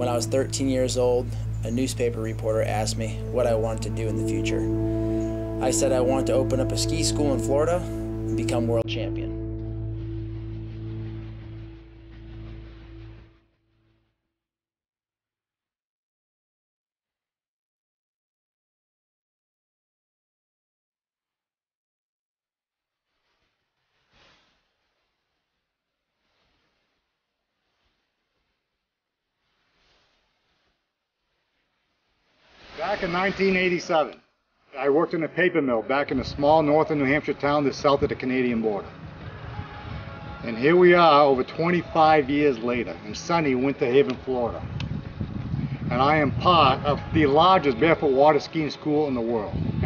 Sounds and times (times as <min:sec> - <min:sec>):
Speech: 0:00.0 - 0:04.7, 0:05.6 - 0:09.4, 0:32.8 - 0:34.2, 0:34.8 - 0:38.9, 0:40.4 - 0:44.7, 0:45.9 - 0:49.8
Music: 0:00.0 - 0:14.0, 0:35.0 - 0:49.8.